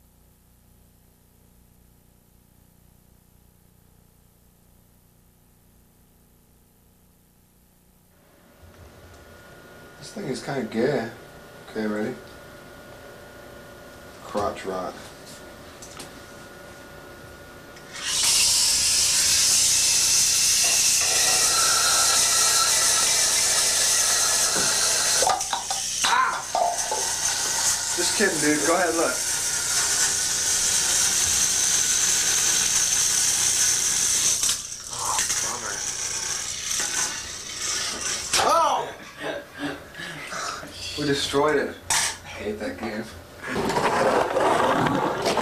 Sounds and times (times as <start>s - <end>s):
Speech: 10.0s - 12.2s, 14.2s - 15.1s, 28.0s - 29.2s, 34.9s - 35.8s, 38.4s - 39.4s, 40.7s - 43.2s.